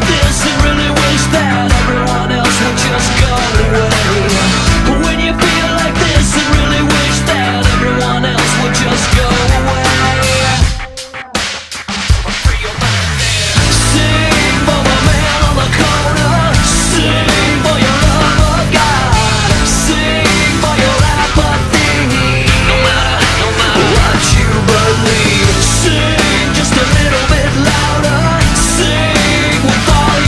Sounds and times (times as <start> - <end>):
Music: 0.0 - 30.2.